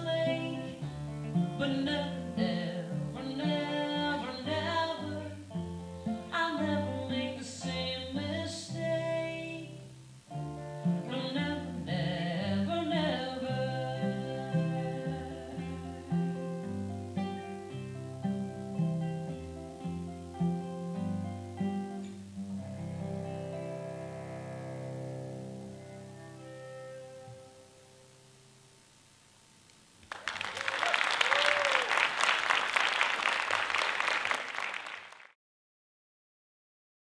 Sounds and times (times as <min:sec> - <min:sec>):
Cello: 0:00.0 - 0:27.9
Guitar: 0:00.0 - 0:32.6.